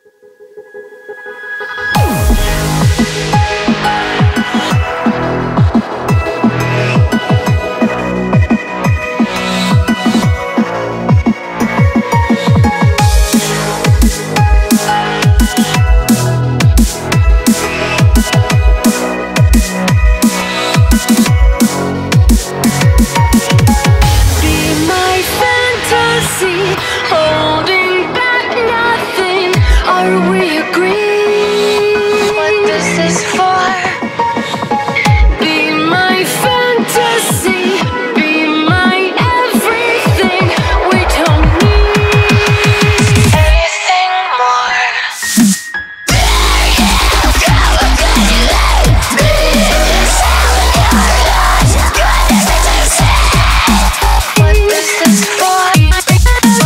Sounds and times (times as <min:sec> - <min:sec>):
Dubstep: 0:01.1 - 0:56.6.